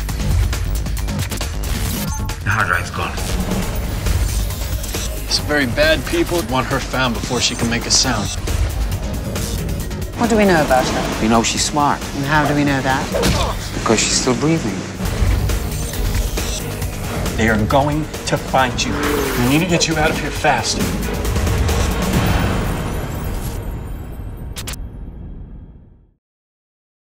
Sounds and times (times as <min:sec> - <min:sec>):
Music: 0:00.0 - 0:26.2.